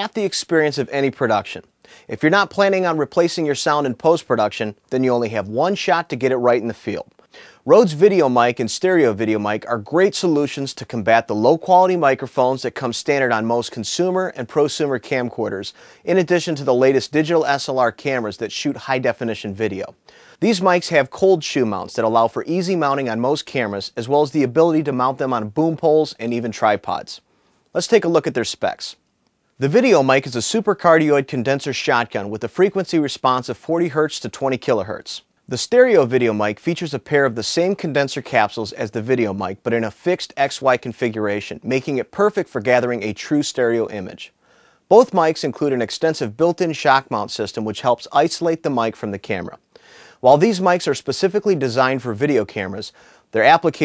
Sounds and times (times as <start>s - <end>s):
Speech: 0.0s - 29.0s, 29.6s - 49.6s, 50.2s - 53.8s.